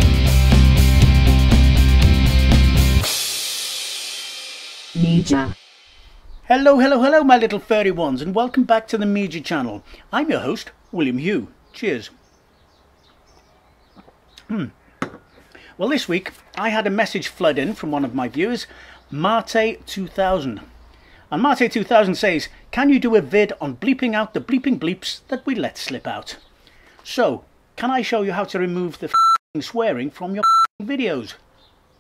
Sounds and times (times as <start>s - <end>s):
Speech: 5.0s - 5.6s, 6.5s - 12.2s, 14.4s - 14.8s, 15.8s - 20.7s, 21.3s - 26.4s, 27.0s - 31.4s
Beep, bleep: 29.2s - 29.4s, 30.4s - 30.7s.